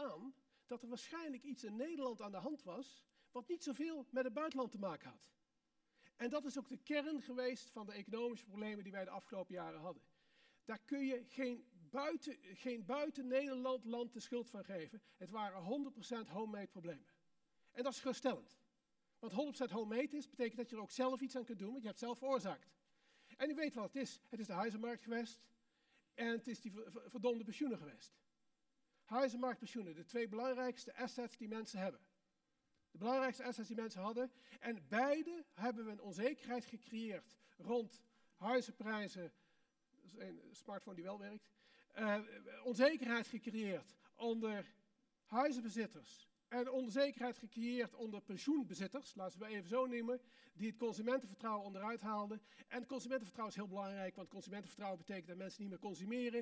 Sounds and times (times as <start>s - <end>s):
Speech: 0.0s - 5.4s, 6.2s - 10.1s, 10.7s - 18.6s, 19.2s - 22.8s, 23.4s - 25.6s, 26.2s - 28.2s, 29.1s - 32.1s, 33.0s - 39.4s, 40.0s - 56.4s.